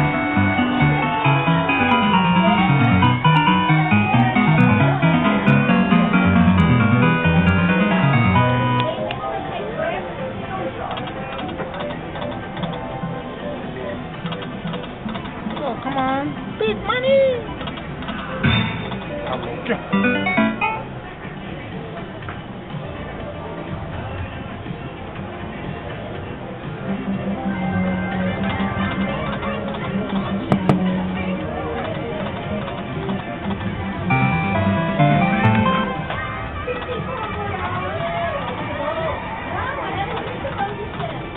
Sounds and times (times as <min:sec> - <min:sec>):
Music: 0:00.0 - 0:41.3.